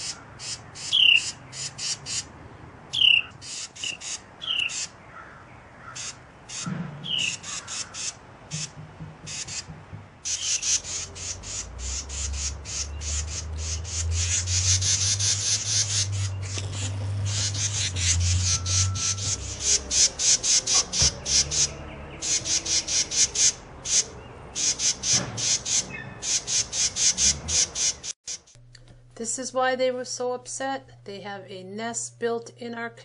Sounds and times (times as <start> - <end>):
Bird: 2.9 - 28.2.